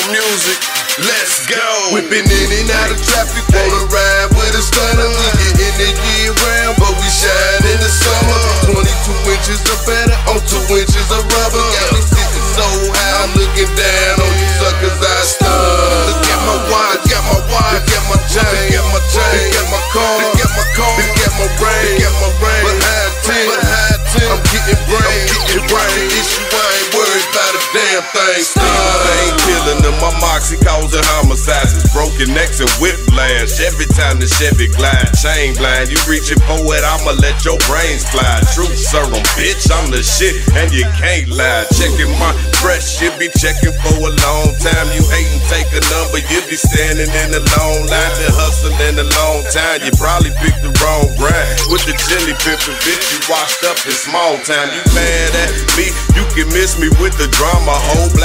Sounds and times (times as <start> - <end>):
Pop music: 0.0 - 58.2.